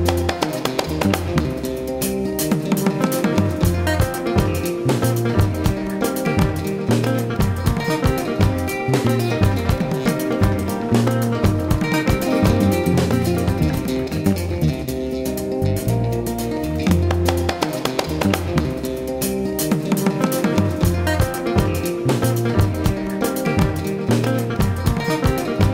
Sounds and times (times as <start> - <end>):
Music: 0.0 - 25.7.